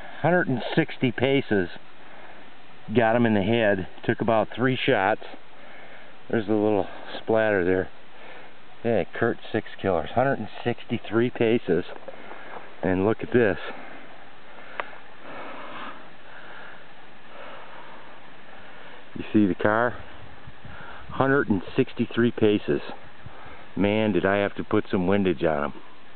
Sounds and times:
Speech: 0.2 - 1.8, 2.9 - 5.4, 6.3 - 7.9, 8.8 - 12.0, 12.8 - 13.8, 19.2 - 20.1, 21.1 - 23.0, 23.8 - 25.8.

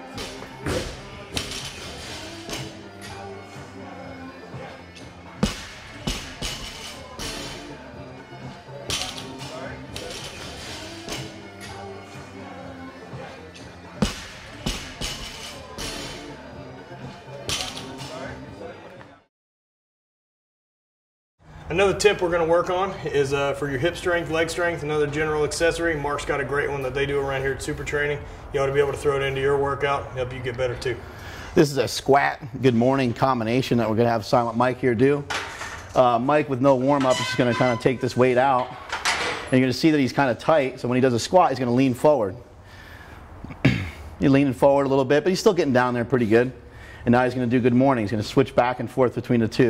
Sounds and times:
Speech: 36.0 - 38.7, 44.2 - 49.7.

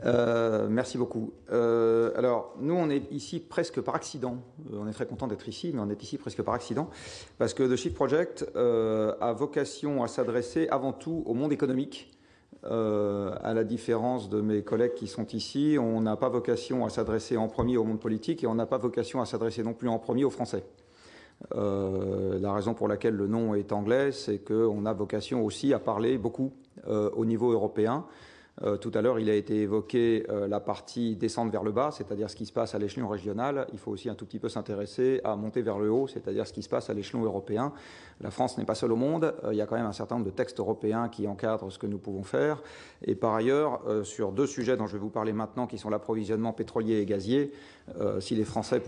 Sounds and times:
Speech: 0.0 - 20.7, 21.4 - 48.8.

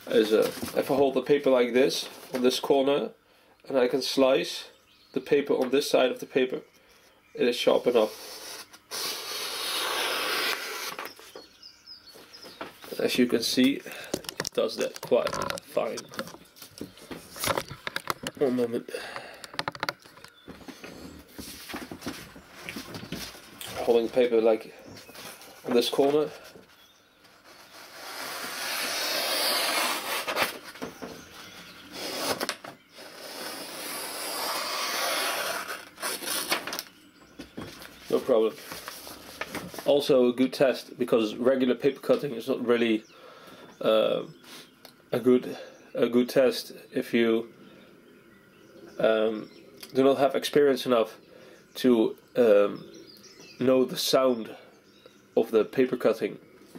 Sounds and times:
Speech: 0.0 - 6.6, 7.4 - 8.1, 12.9 - 13.9, 14.6 - 16.1, 18.4 - 19.0, 23.7 - 24.8, 25.6 - 26.4, 38.1 - 38.6, 39.9 - 43.0, 43.8 - 44.3, 45.1 - 47.5, 49.0 - 51.2, 51.8 - 52.9, 53.6 - 54.7, 55.4 - 56.4.

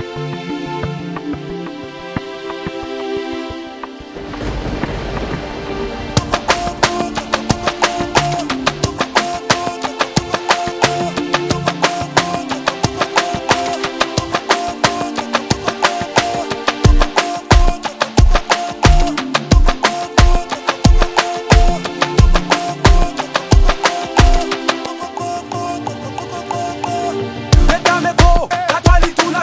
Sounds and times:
Music: 0.0 - 29.4.

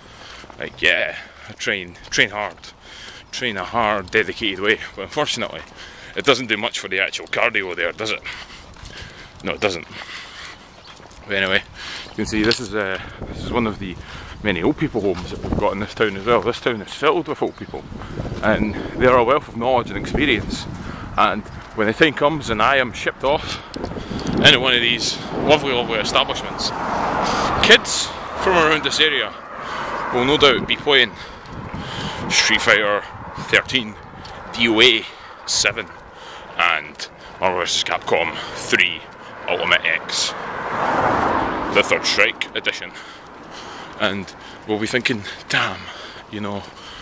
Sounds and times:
Speech: 0.6 - 8.3, 9.4 - 10.0, 11.3 - 17.8, 18.4 - 23.6, 24.4 - 26.8, 27.6 - 29.4, 30.1 - 31.2, 32.3 - 36.0, 36.6 - 40.4, 41.7 - 43.0, 44.0 - 46.7.

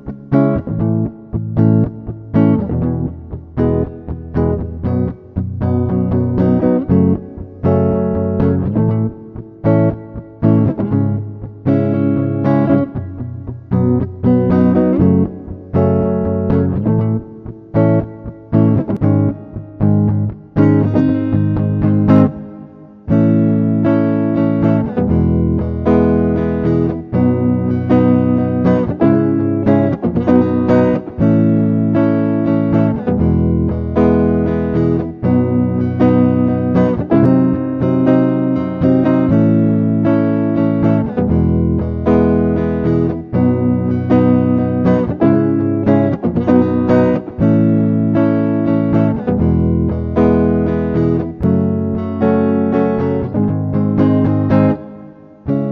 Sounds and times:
Electric guitar: 0.0 - 55.7.

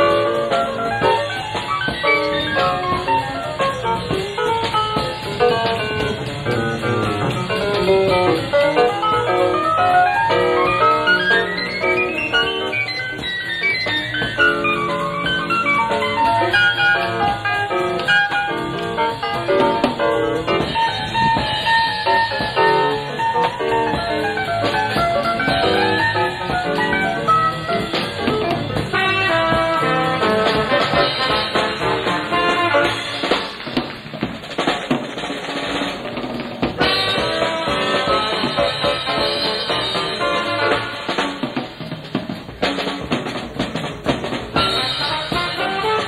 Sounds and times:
Musical instrument: 0.0 - 33.8, 36.8 - 41.9, 44.6 - 46.0
Jazz: 0.0 - 46.0.

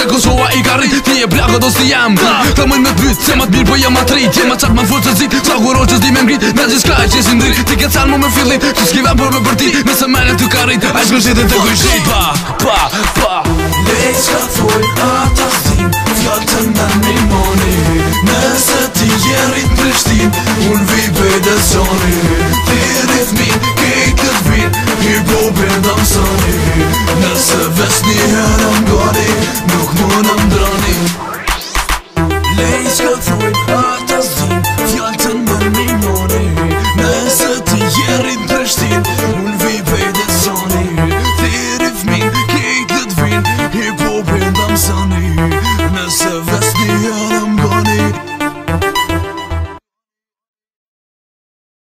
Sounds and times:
Afrobeat: 0.0 - 49.7.

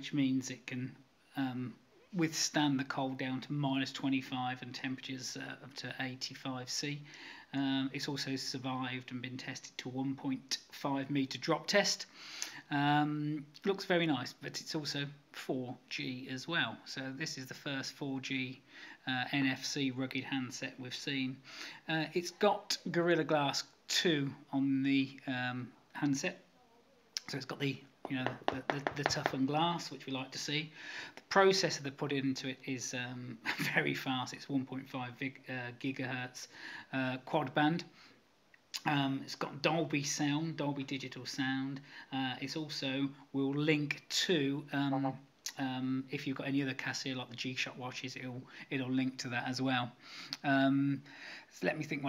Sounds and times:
Speech: 0.0 - 12.1, 12.7 - 37.9, 38.8 - 52.0.

